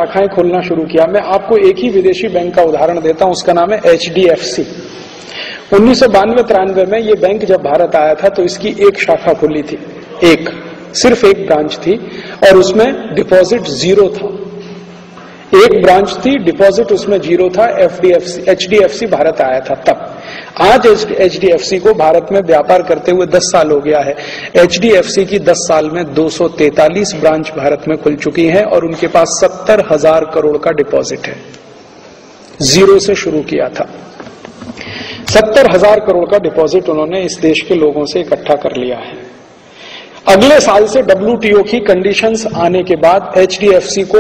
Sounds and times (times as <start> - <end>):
Speech: 0.0 - 4.8, 5.7 - 14.6, 15.5 - 31.5, 32.6 - 34.0, 35.3 - 39.3, 40.2 - 44.2.